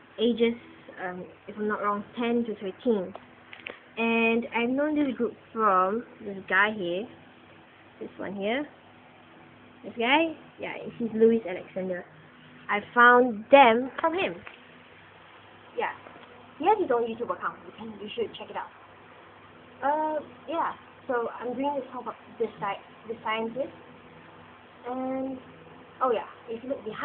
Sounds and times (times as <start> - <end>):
Speech: 0.2 - 3.2, 4.0 - 7.1, 8.0 - 8.7, 9.9 - 12.1, 16.6 - 18.7, 19.8 - 23.7, 24.8 - 25.4, 26.0 - 27.0.